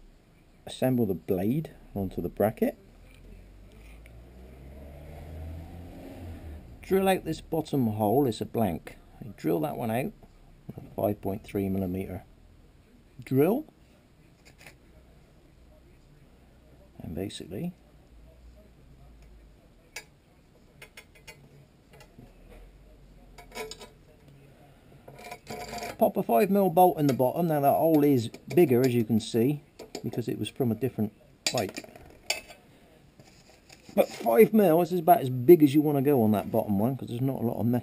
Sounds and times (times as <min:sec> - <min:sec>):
Speech: 0:00.6 - 0:04.0, 0:06.8 - 0:25.0, 0:26.0 - 0:31.8, 0:33.9 - 0:37.8.